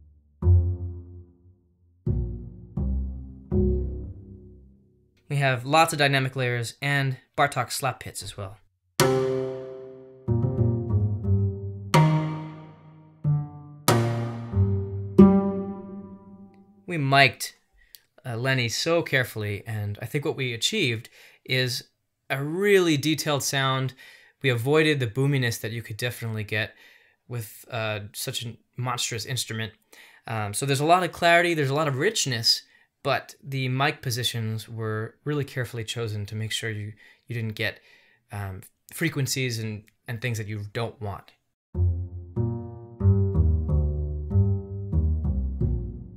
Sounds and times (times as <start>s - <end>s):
Speech: 5.3s - 8.7s, 16.9s - 17.6s, 18.2s - 41.4s
Piano: 9.0s - 16.4s, 41.8s - 46.1s.